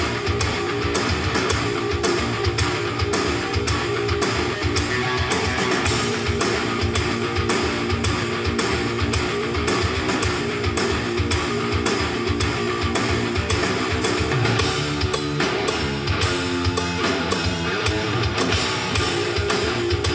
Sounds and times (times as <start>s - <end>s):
Guitar: 0.0s - 20.1s.